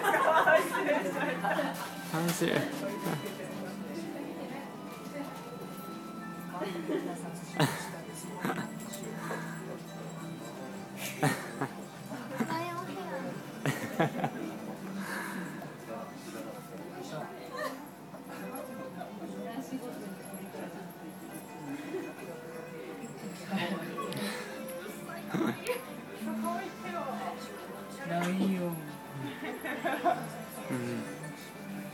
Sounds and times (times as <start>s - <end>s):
Music: 0.0s - 31.9s.